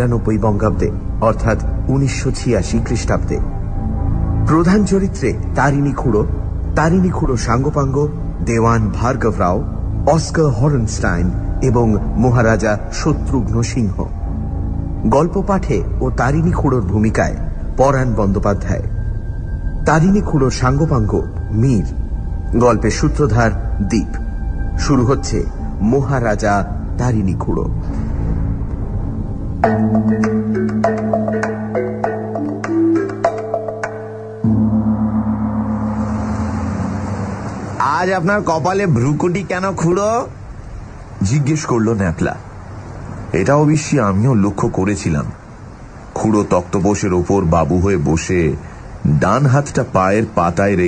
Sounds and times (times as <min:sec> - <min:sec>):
Speech: 0:00.0 - 0:03.4, 0:15.1 - 0:18.9, 0:24.8 - 0:27.8, 0:37.8 - 0:40.4, 0:41.2 - 0:42.4, 0:43.3 - 0:45.4, 0:46.2 - 0:50.8
Music: 0:00.0 - 0:37.9.